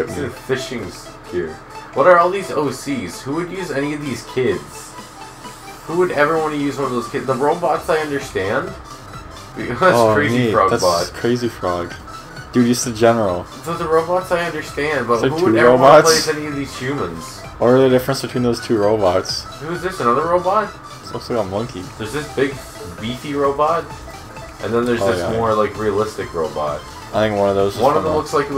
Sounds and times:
Music: 0.0s - 28.5s
Speech: 5.9s - 8.7s, 9.6s - 11.9s, 12.6s - 23.9s, 24.6s - 28.5s.

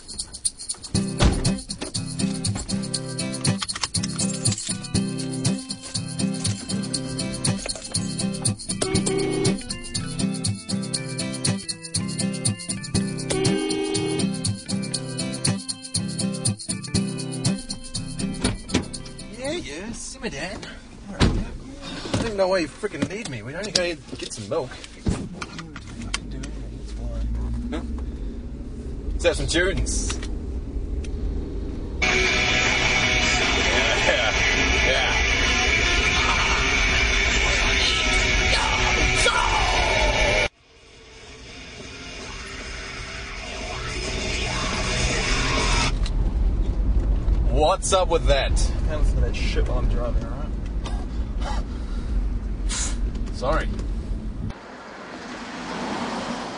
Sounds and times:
Speech: 29.2s - 30.2s, 47.5s - 50.5s.

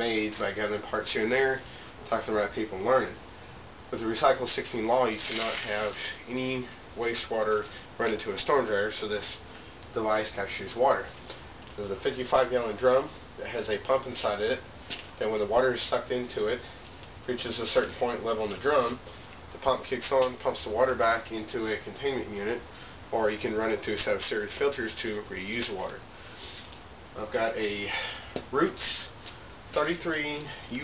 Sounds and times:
Speech: 0.0s - 3.2s, 3.9s - 11.1s, 11.8s - 14.6s, 15.2s - 16.6s, 17.2s - 19.0s, 19.6s - 26.0s, 27.2s - 29.1s, 29.7s - 30.8s.

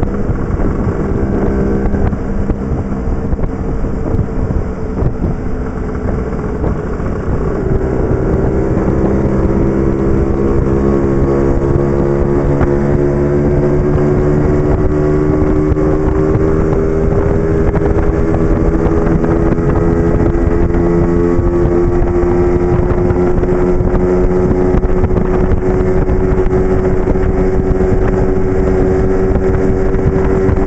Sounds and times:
Motorcycle: 0.0s - 30.6s.

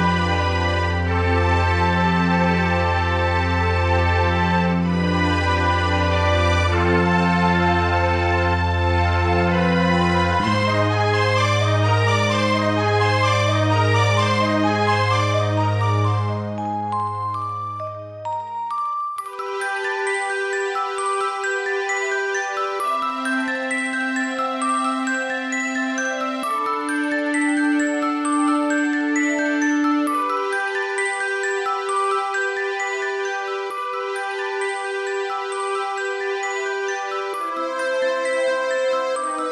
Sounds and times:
Theme music: 0.0s - 31.1s.

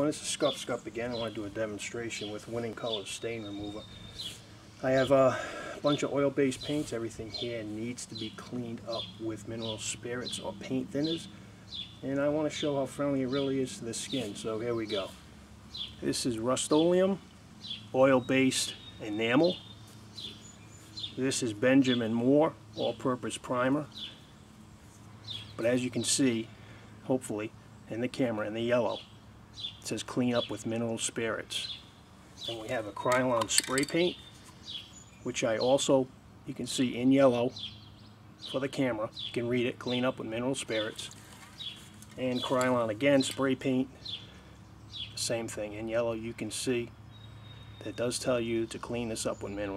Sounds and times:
Speech: 0.0s - 3.9s, 4.8s - 11.3s, 12.0s - 15.2s, 16.0s - 17.2s, 17.9s - 19.6s, 21.2s - 23.9s, 25.6s - 29.0s, 29.8s - 31.8s, 32.4s - 34.2s, 35.2s - 37.6s, 38.5s - 41.2s, 42.1s - 44.0s, 45.2s - 47.0s, 47.8s - 49.7s.

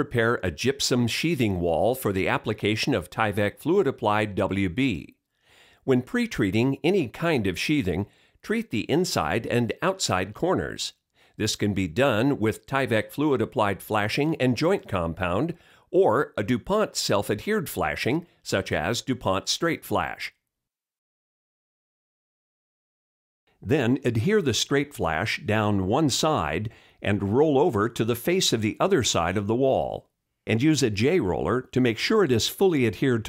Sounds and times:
Speech: 0.0s - 5.2s, 5.9s - 20.4s, 23.6s - 33.2s.

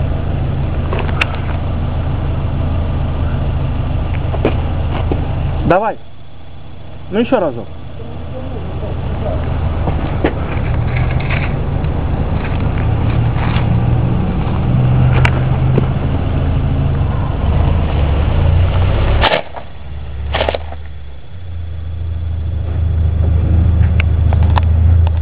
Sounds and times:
Car passing by: 12.2s - 20.8s.

